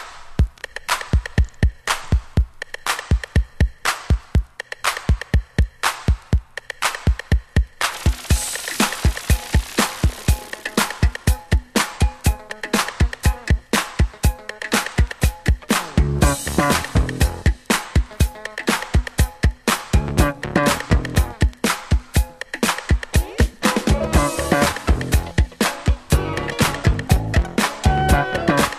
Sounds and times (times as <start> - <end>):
Funk: 0.0 - 28.7.